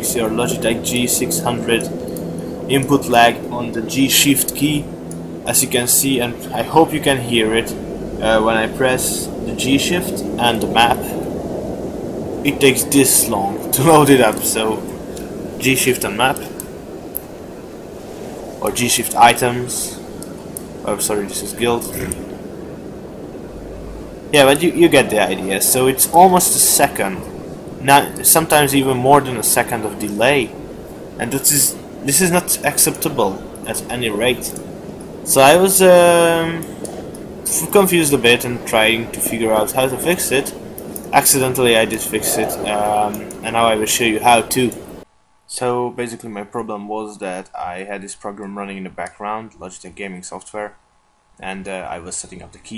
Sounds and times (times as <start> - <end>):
Speech: 0.0 - 1.9, 2.7 - 4.9, 5.5 - 11.3, 12.5 - 15.0, 15.6 - 16.6, 18.6 - 20.0, 20.8 - 22.3, 24.4 - 30.6, 31.2 - 34.6, 35.3 - 36.7, 37.5 - 44.8, 45.5 - 50.8, 51.4 - 52.7.